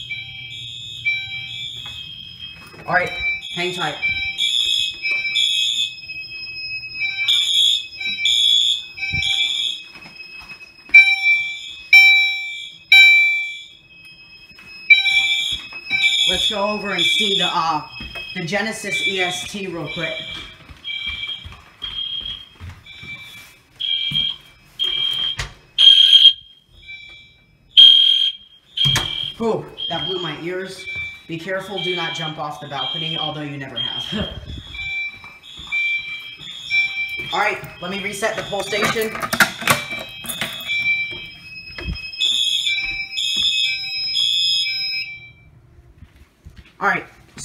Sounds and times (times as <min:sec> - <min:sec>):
Fire alarm: 0:00.0 - 0:46.0
Speech: 0:29.4 - 0:34.4, 0:37.3 - 0:39.2, 0:46.8 - 0:47.4.